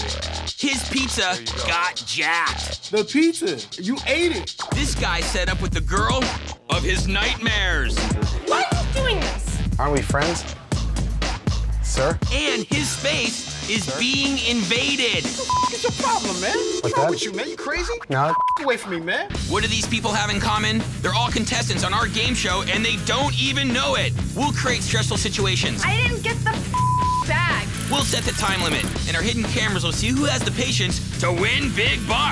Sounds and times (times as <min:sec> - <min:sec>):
Music: 0:00.0 - 0:32.3
Speech: 0:00.6 - 0:10.5, 0:11.9 - 0:32.3.